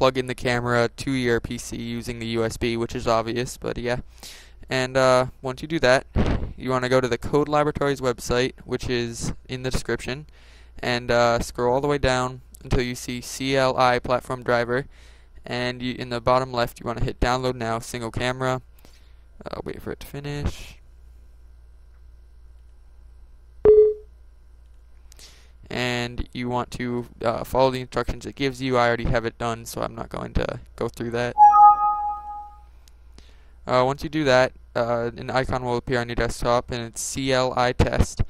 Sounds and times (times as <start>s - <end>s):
Speech: 0.0s - 4.0s, 4.7s - 14.9s, 15.5s - 18.6s, 19.4s - 20.8s, 25.7s - 31.4s, 33.7s - 38.3s.